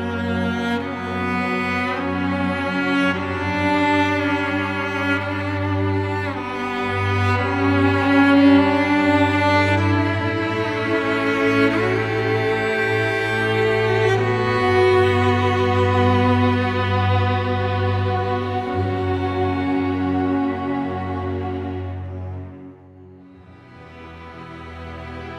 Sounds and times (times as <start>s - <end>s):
Sad music: 0.0s - 25.3s
Violin, fiddle: 0.0s - 25.3s.